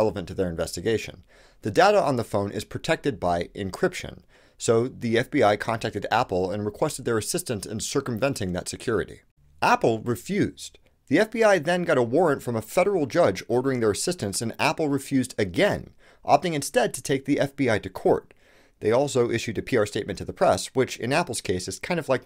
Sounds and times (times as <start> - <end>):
Speech: 0.0 - 22.2.